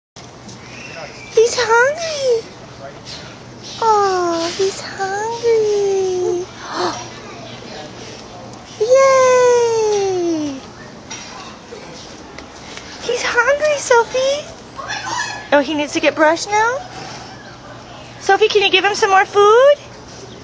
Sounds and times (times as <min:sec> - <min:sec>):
Child speech, kid speaking: 0:03.8 - 0:07.3.